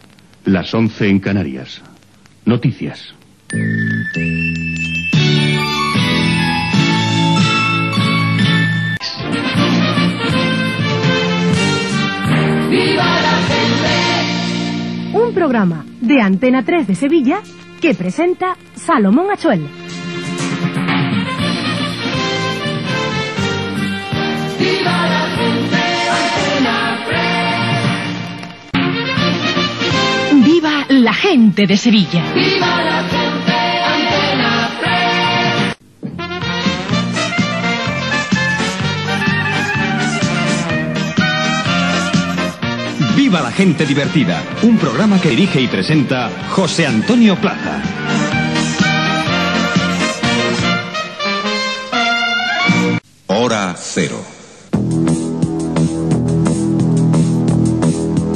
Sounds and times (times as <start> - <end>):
Speech: 0.5 - 3.2, 30.3 - 32.3, 43.1 - 47.8, 53.3 - 54.4
Music: 3.4 - 53.1, 54.7 - 58.3.